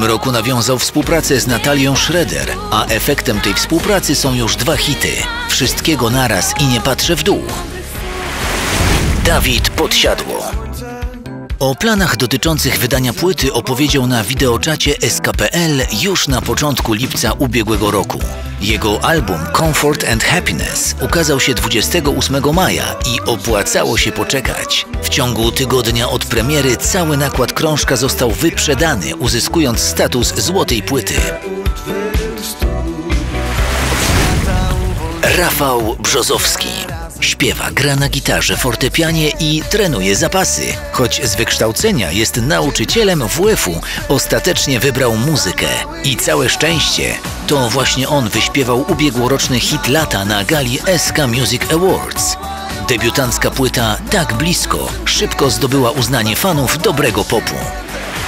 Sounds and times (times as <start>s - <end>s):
Speech: 0.0s - 7.6s, 9.2s - 10.9s, 11.6s - 31.4s, 35.2s - 57.8s
Music: 0.0s - 58.2s.